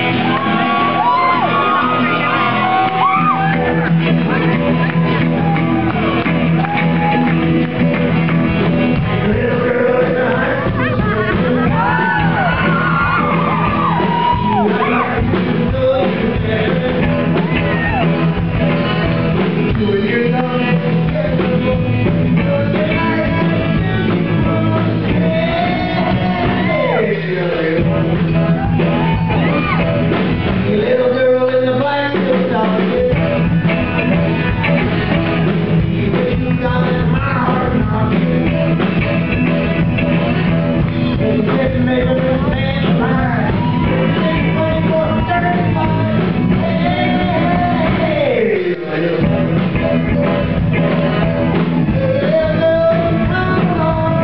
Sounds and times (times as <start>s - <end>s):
Music: 0.0s - 54.2s
Male singing: 9.0s - 18.0s, 19.7s - 28.8s, 30.6s - 33.5s, 35.8s - 39.2s, 41.1s - 51.1s, 51.8s - 54.2s.